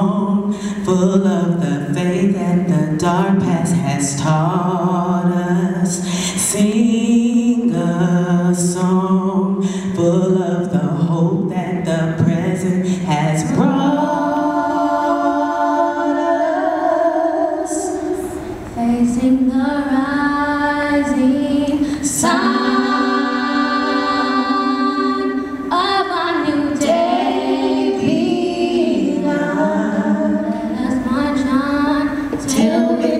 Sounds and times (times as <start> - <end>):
Singing: 0.0 - 33.1.